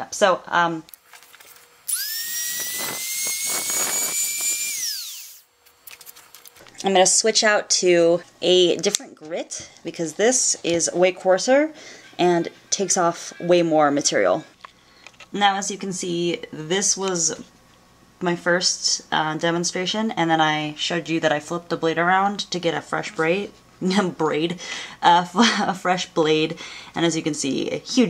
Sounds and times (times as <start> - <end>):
Speech: 0.0 - 0.9, 6.8 - 14.5, 15.4 - 17.5, 18.2 - 28.0.